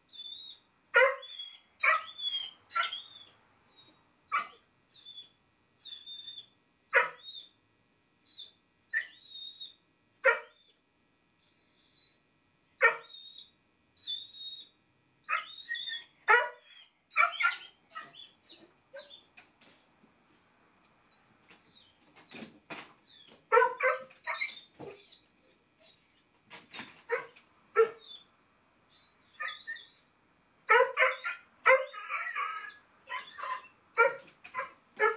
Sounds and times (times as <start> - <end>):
Bark: 1.0 - 3.1, 4.3 - 4.6, 6.9 - 7.3, 10.2 - 10.6, 12.8 - 13.2, 15.3 - 15.6, 16.3 - 18.2, 23.5 - 25.0, 27.1 - 28.1, 30.7 - 35.1.